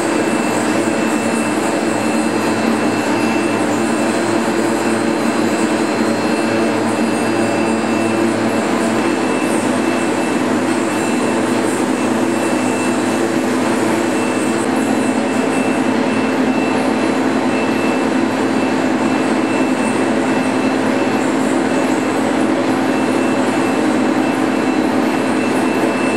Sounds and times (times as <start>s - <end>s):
Vehicle: 0.0s - 26.1s.